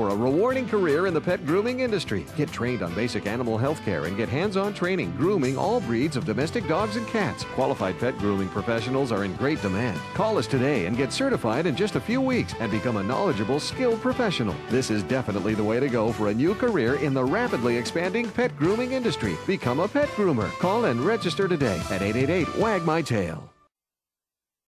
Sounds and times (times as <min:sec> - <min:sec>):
Speech: 0:00.0 - 0:23.6
Music: 0:00.0 - 0:23.7.